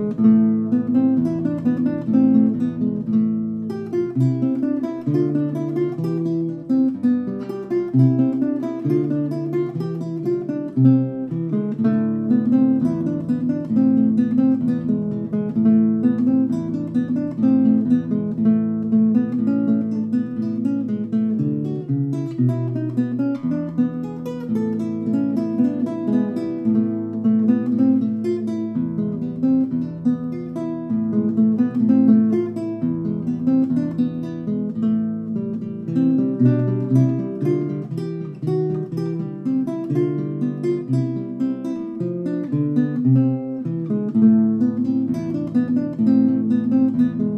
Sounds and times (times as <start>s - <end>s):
Acoustic guitar: 0.0s - 47.3s
Strum: 0.0s - 47.3s.